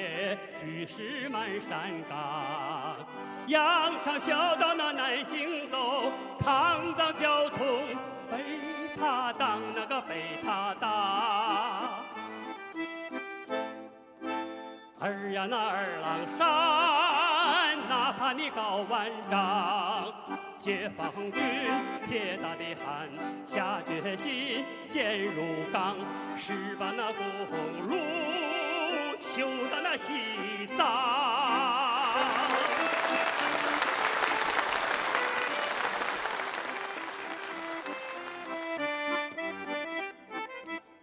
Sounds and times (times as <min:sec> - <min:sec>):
Male singing: 0:00.0 - 0:12.2, 0:15.0 - 0:33.2
Music: 0:00.0 - 0:41.0.